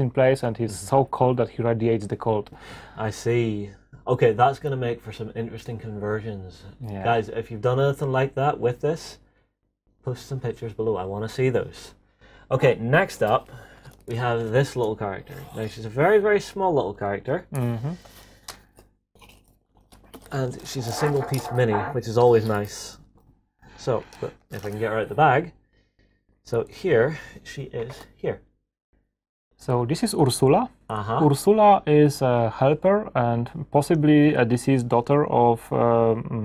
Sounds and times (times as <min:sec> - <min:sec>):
Speech: 0:00.0 - 0:09.2, 0:10.0 - 0:13.5, 0:14.1 - 0:18.0, 0:20.2 - 0:23.0, 0:23.8 - 0:25.5, 0:26.5 - 0:28.4, 0:29.6 - 0:36.4
Inside, small room: 0:00.0 - 0:36.4.